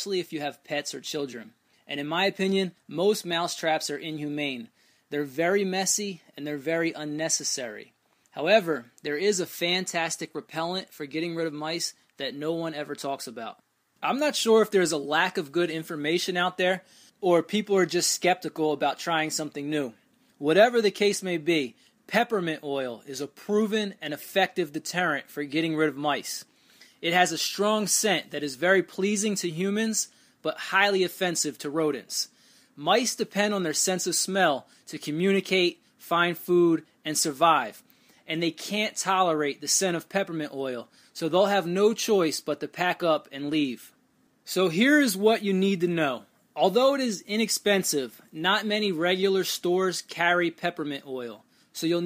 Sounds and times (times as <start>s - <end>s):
Speech: 0.0s - 52.0s.